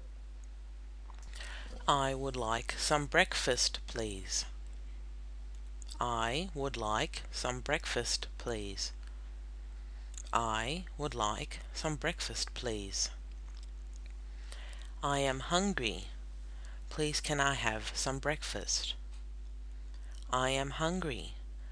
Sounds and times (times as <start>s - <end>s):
Speech: 1.8s - 4.6s, 5.9s - 9.0s, 10.2s - 13.2s, 15.0s - 16.2s, 16.9s - 19.0s, 20.3s - 21.4s.